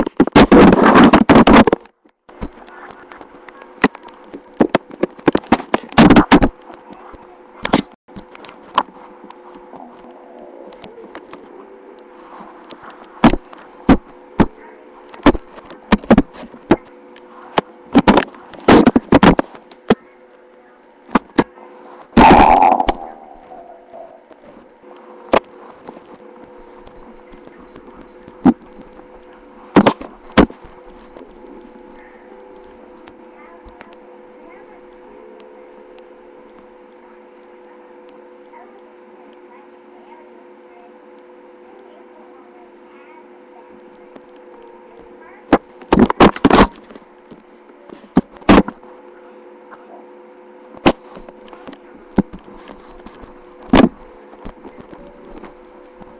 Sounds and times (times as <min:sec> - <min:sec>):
Speech: 0:14.4 - 0:15.0, 0:19.9 - 0:22.0, 0:26.6 - 0:29.7, 0:31.2 - 0:36.0, 0:36.9 - 0:46.9, 0:54.0 - 0:55.6.